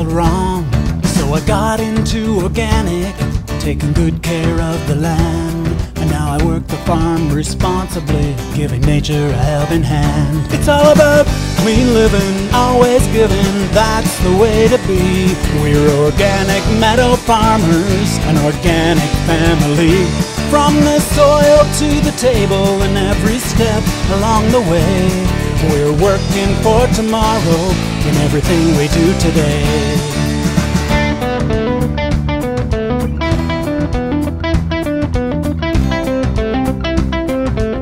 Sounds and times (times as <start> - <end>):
Country: 0.0 - 37.8.